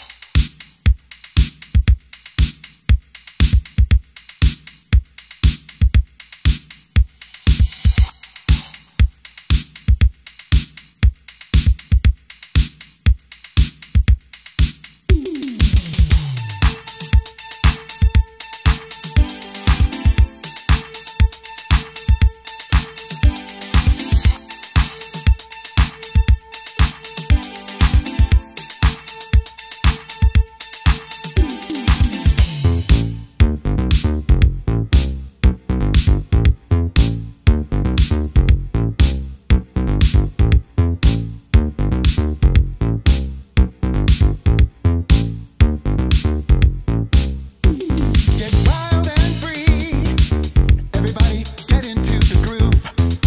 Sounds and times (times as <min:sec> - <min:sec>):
Funk: 0:00.0 - 0:53.2
Jazz: 0:15.1 - 0:53.2.